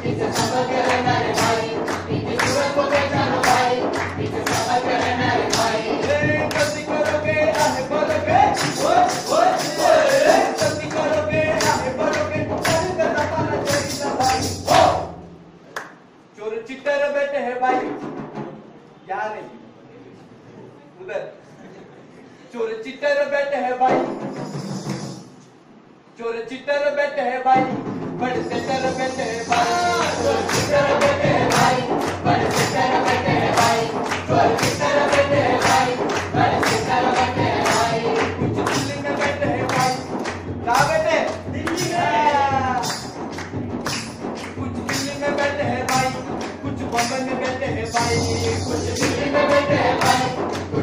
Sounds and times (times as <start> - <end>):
Singing: 0.0 - 15.2, 26.2 - 43.2, 44.4 - 50.8
Tambourine: 6.6 - 12.0, 24.1 - 25.4, 47.0 - 50.5.